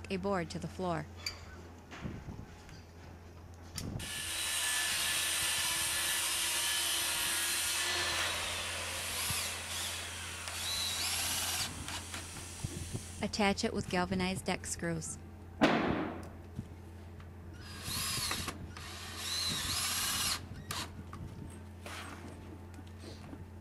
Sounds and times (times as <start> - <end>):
Speech: 0.0 - 1.1, 13.2 - 15.2.